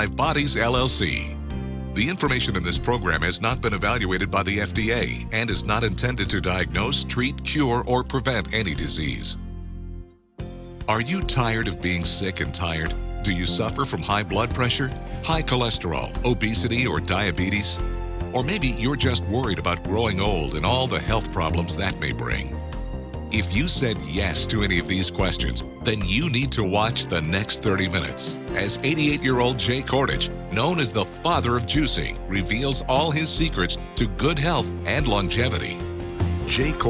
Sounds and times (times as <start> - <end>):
Speech: 0.0 - 1.4, 2.0 - 9.4, 10.9 - 22.5, 23.3 - 35.8, 36.5 - 36.8
Music: 0.0 - 36.8.